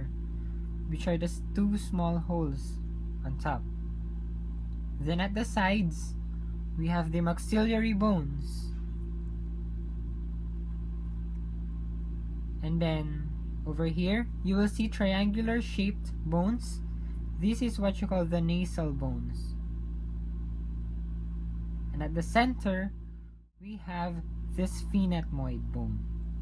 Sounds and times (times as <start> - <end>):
Speech: 0.9 - 3.7, 5.0 - 6.2, 6.8 - 8.8, 12.6 - 16.8, 17.4 - 19.6, 21.9 - 23.0, 23.6 - 26.1.